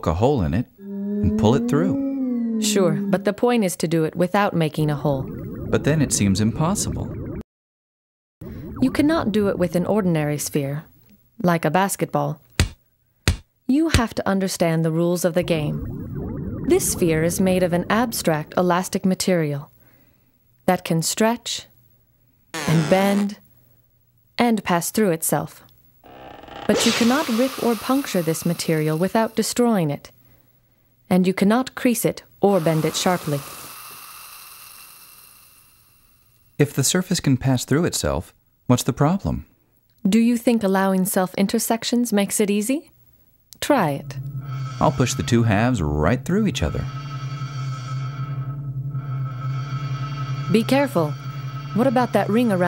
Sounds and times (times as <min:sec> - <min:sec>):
Speech: 0:00.0 - 0:02.0, 0:02.6 - 0:05.2, 0:05.8 - 0:07.1, 0:08.8 - 0:12.4, 0:13.7 - 0:15.8, 0:16.7 - 0:19.7, 0:26.7 - 0:30.1, 0:31.1 - 0:33.4, 0:36.6 - 0:39.5, 0:40.1 - 0:42.9, 0:43.6 - 0:44.0, 0:44.8 - 0:46.9, 0:51.8 - 0:52.6.